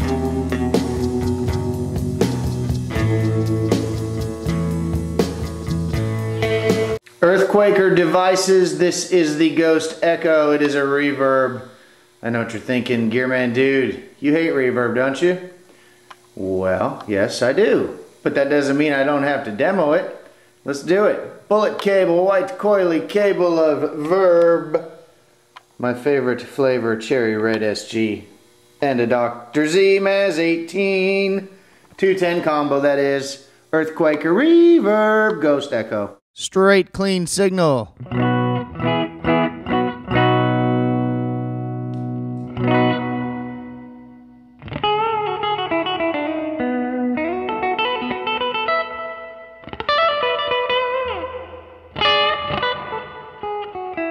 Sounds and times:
Speech: 7.2 - 15.6, 16.4 - 24.9, 25.8 - 38.0.

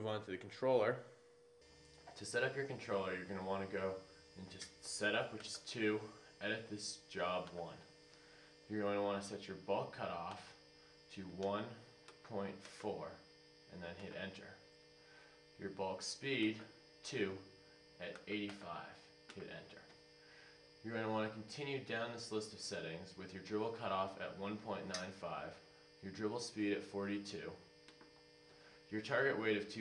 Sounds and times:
Speech: 0.0 - 1.1, 2.1 - 7.9, 8.7 - 14.6, 15.6 - 19.9, 20.8 - 27.6, 28.9 - 29.8.

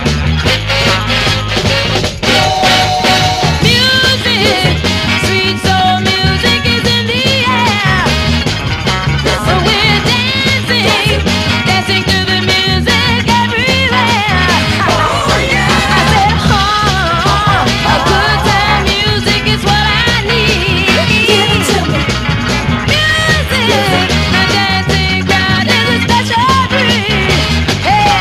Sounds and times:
Exciting music: 0.0 - 12.2, 13.3 - 28.2.

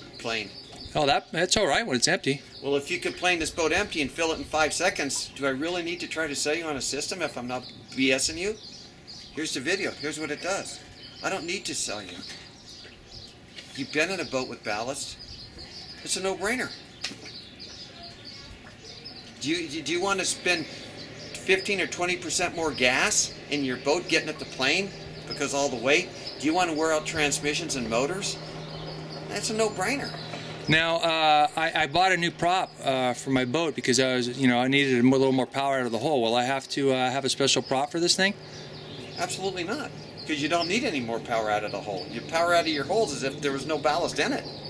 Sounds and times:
Outside, rural or natural: 0.0 - 44.7
Speech: 0.2 - 8.6, 9.4 - 12.3, 13.8 - 15.2, 16.0 - 16.8, 19.4 - 20.7, 21.4 - 28.4, 29.3 - 38.4, 39.2 - 44.5.

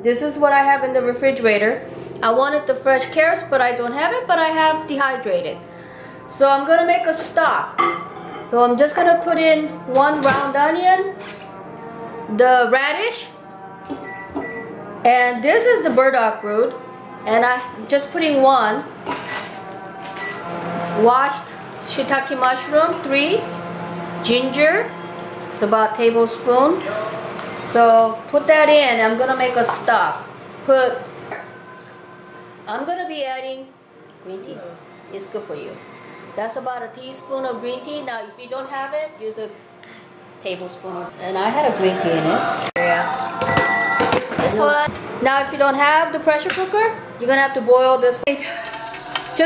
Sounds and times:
Music: 0.0 - 49.4.

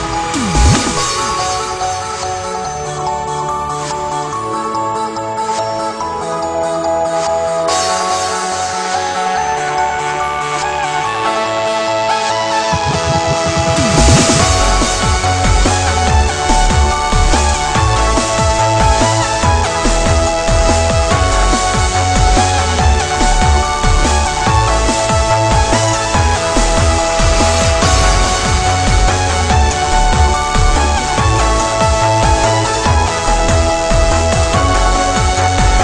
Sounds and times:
Electronic music: 0.0 - 35.8.

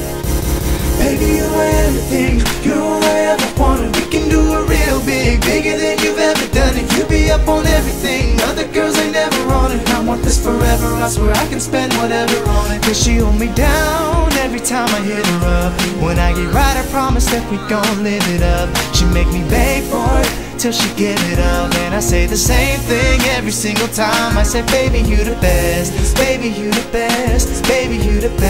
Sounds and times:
Music: 0.0 - 28.4
Male singing: 1.0 - 28.4.

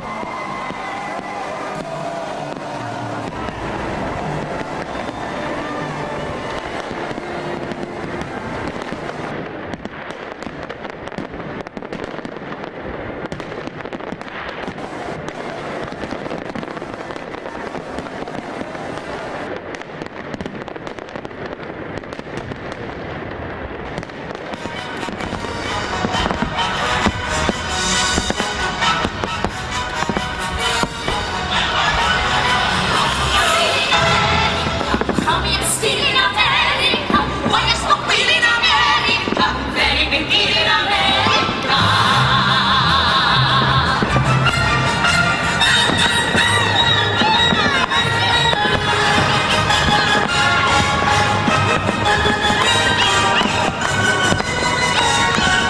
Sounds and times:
Fireworks: 0.0 - 55.6.

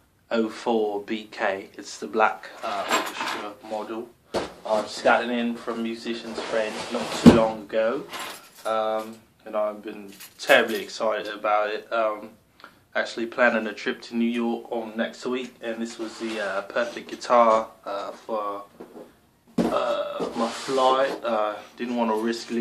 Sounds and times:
Speech: 0.3 - 12.4, 13.0 - 18.7, 19.6 - 22.6.

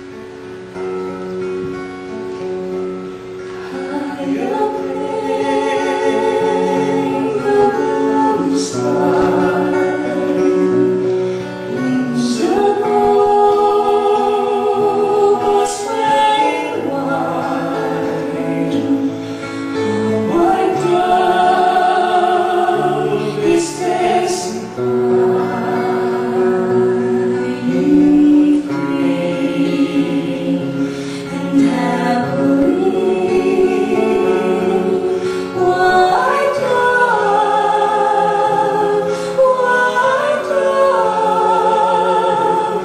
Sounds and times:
Music: 0.0 - 42.8.

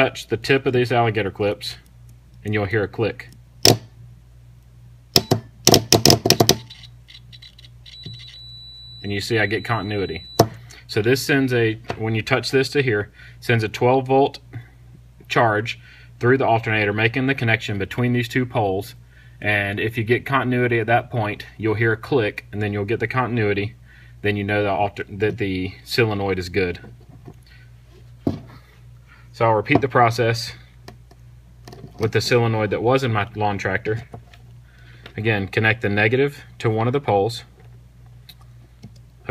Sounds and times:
Speech: 0.0 - 1.8, 2.4 - 3.4, 9.0 - 10.3, 10.9 - 14.5, 15.3 - 26.9, 29.4 - 30.6, 32.0 - 34.2, 35.2 - 37.6
Inside, small room: 0.0 - 39.3.

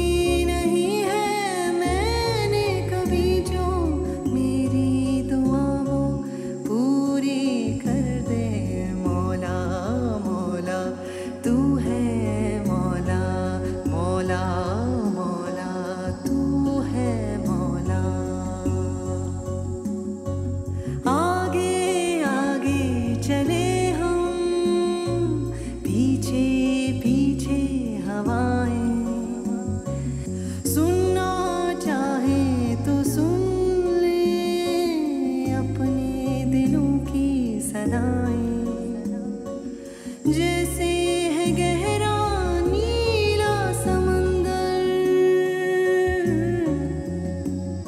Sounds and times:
Music: 0.0 - 47.8.

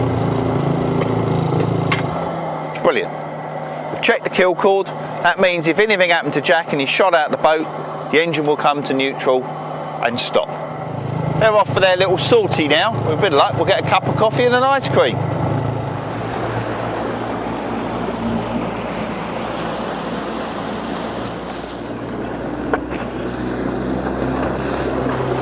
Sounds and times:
Motorboat, speedboat: 0.0 - 25.4
Speech: 2.8 - 3.1, 4.0 - 10.6, 11.4 - 15.2.

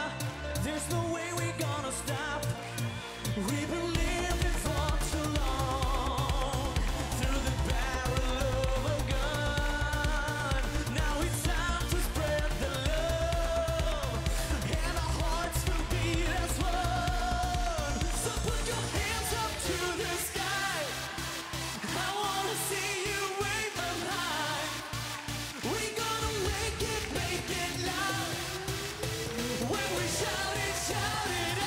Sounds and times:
Music: 0.0 - 31.6.

